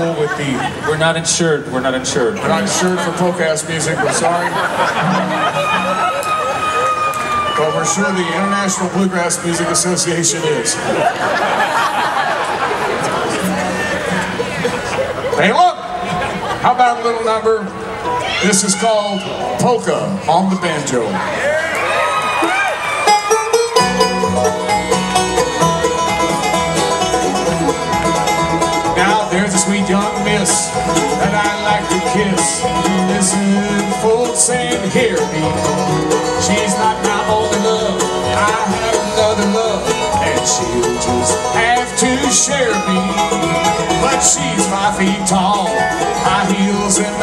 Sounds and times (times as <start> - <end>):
Banjo: 0.0 - 6.6, 7.8 - 18.7, 23.0 - 47.2
Bluegrass: 0.0 - 47.2
Song: 23.1 - 47.2.